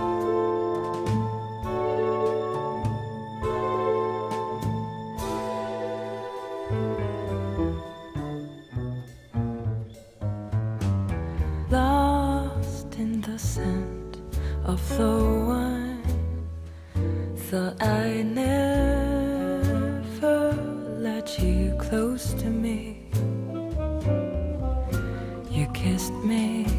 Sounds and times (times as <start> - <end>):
Tender music: 0.0 - 26.7.